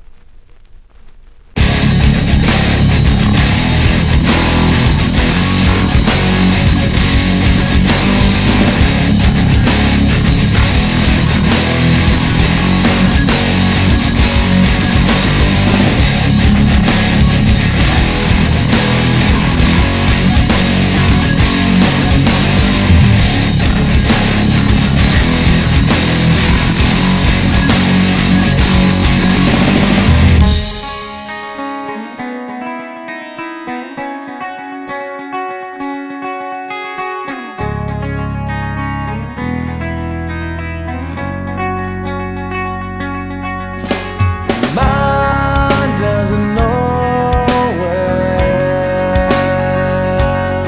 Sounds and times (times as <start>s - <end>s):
Music: 1.6s - 50.6s.